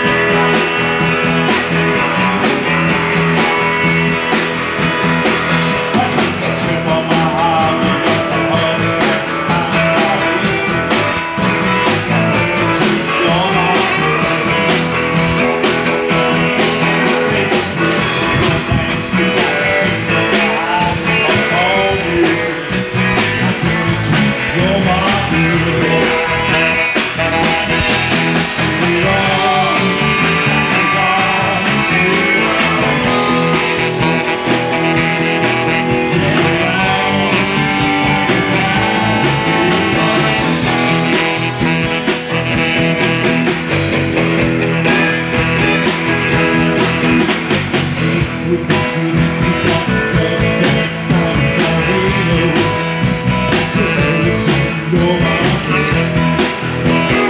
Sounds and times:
Music: 0.0s - 57.3s.

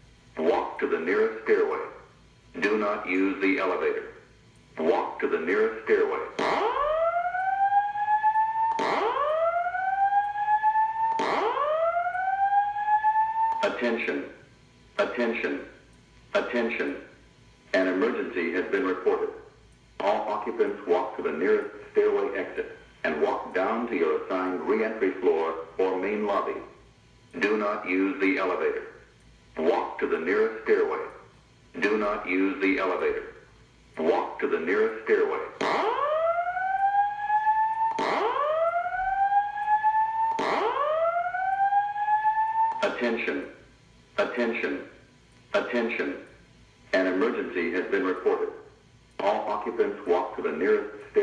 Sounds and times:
Speech: 0.4s - 2.0s, 2.6s - 4.2s, 4.8s - 6.4s, 13.6s - 14.4s, 15.0s - 26.8s, 27.4s - 29.0s, 29.6s - 31.2s, 31.8s - 33.4s, 34.0s - 35.6s, 42.8s - 43.6s, 44.2s - 45.0s, 45.6s - 51.2s.

